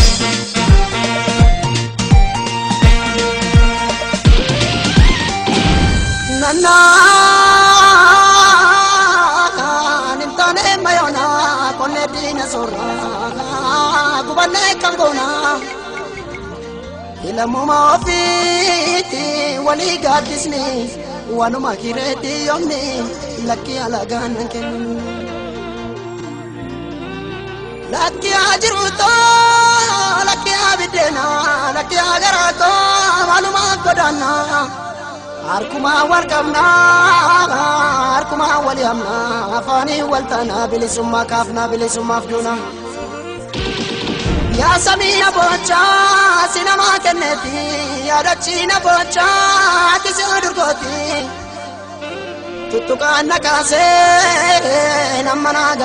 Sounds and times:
Music: 0.0 - 55.8.

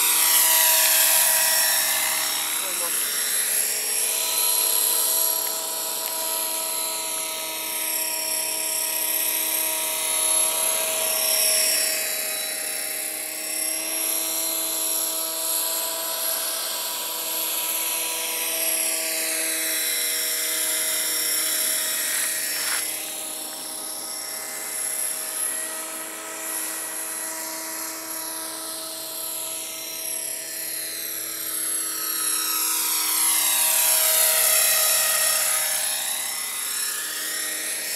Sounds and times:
Speech: 2.6 - 3.0.

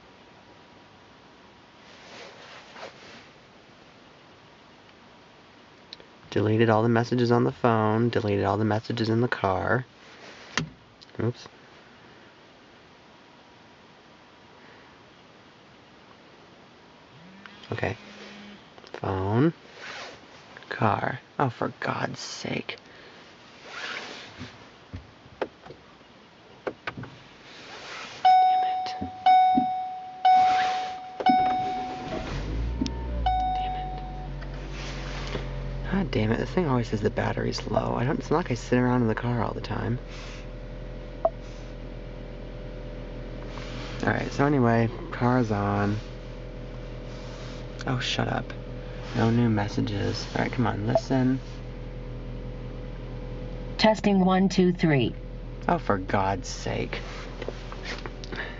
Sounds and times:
Speech: 6.3 - 9.9, 11.1 - 11.6, 17.7 - 18.0, 18.9 - 19.6, 20.7 - 22.8, 28.7 - 29.1, 35.8 - 40.0, 44.0 - 46.0, 47.8 - 51.4, 53.8 - 57.1.

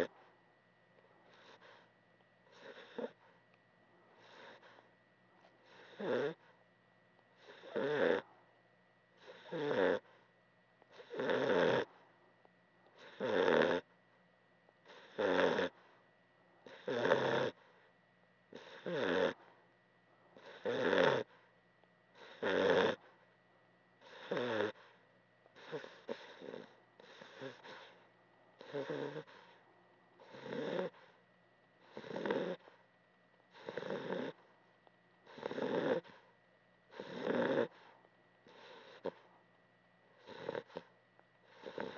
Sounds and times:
Snoring: 1.3 - 1.9, 2.5 - 3.2, 4.2 - 4.9, 5.6 - 6.5, 7.4 - 8.3, 9.2 - 10.2, 10.9 - 12.0, 13.0 - 13.9, 14.8 - 15.9, 16.6 - 17.7, 18.5 - 19.5, 20.4 - 21.4, 22.2 - 23.1, 24.0 - 25.0, 25.6 - 28.0, 28.6 - 29.6, 30.2 - 31.2, 31.8 - 32.8, 33.5 - 34.5, 35.2 - 36.3, 36.9 - 39.3, 40.2 - 41.9.

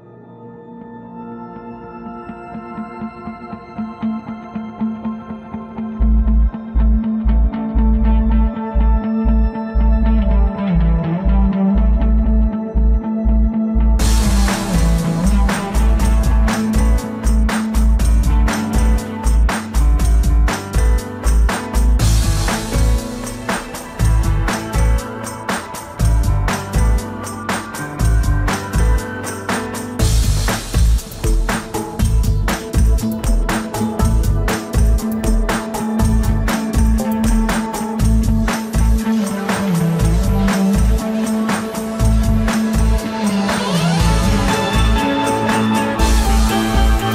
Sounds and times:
Music: 0.0 - 47.1.

